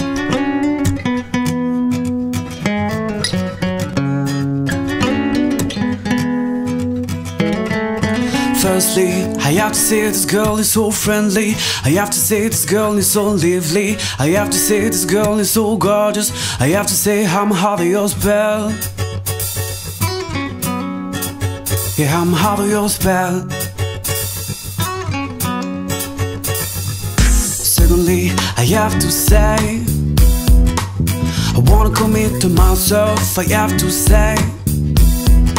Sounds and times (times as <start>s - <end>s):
Blues: 0.0s - 35.5s.